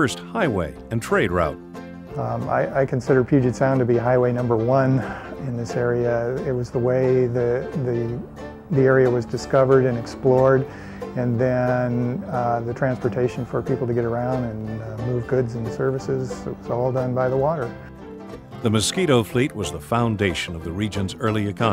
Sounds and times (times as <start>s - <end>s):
Speech: 0.0s - 1.6s, 2.2s - 17.7s, 18.6s - 21.7s
Music: 0.0s - 21.7s.